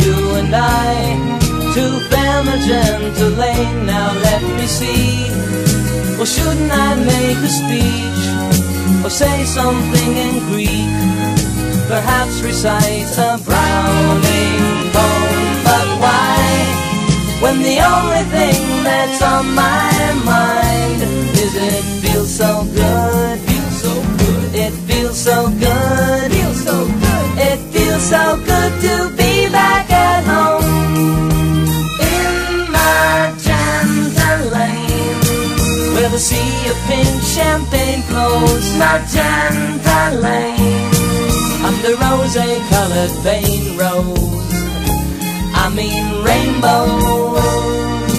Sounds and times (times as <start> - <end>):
Happy music: 0.0 - 48.1.